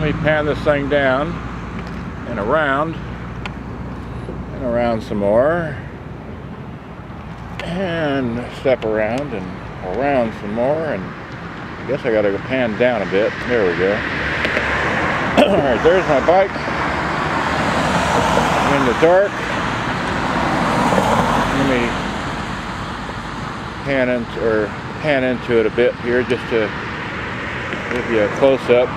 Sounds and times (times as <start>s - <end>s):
Speech: 0.0s - 1.4s, 2.3s - 3.0s, 4.6s - 5.9s, 7.6s - 11.1s, 11.9s - 14.0s, 15.4s - 16.6s, 18.7s - 19.4s, 21.6s - 22.0s, 23.8s - 26.8s, 27.9s - 28.9s
Vehicle: 0.0s - 28.9s.